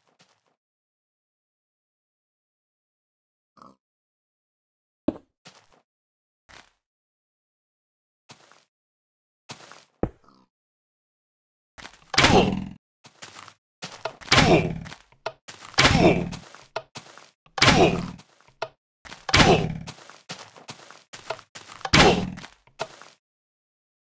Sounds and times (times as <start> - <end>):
Thump, thud: 17.6 - 18.2, 19.3 - 19.8, 21.9 - 22.4.